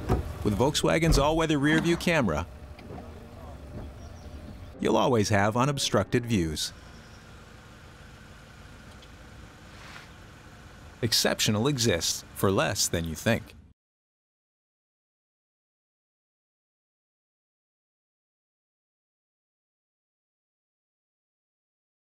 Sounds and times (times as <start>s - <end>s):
Speech: 0.4s - 3.8s, 4.8s - 6.8s, 11.0s - 13.6s.